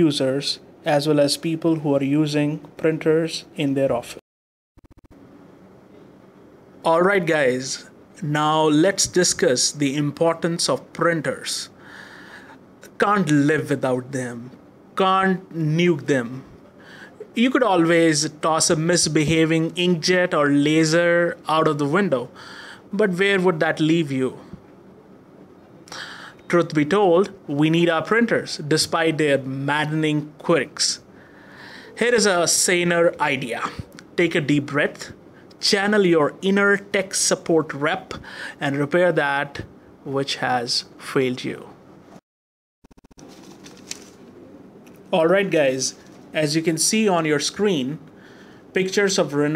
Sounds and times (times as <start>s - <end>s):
Speech: 0.0s - 4.2s, 6.8s - 11.8s, 12.9s - 16.6s, 17.3s - 24.6s, 26.5s - 31.1s, 32.0s - 41.8s, 45.1s - 48.1s, 48.8s - 49.5s.